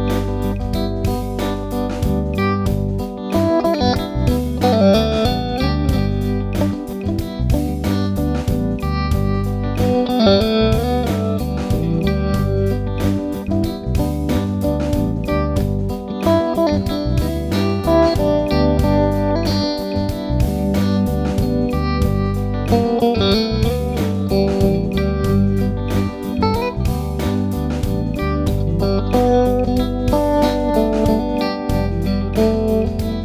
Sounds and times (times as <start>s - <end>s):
Distortion: 0.0s - 33.2s
Music: 0.0s - 33.2s.